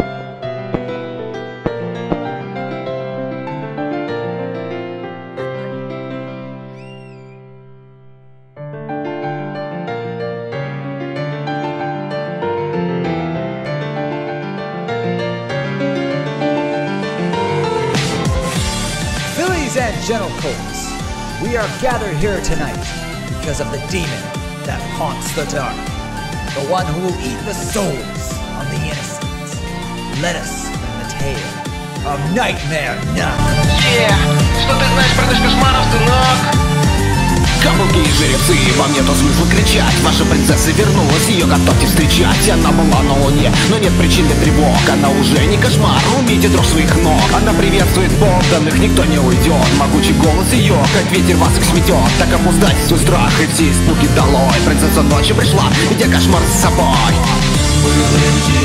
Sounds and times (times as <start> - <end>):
Music: 0.0 - 58.6
Speech: 19.3 - 25.8, 26.5 - 29.6, 30.2 - 36.5.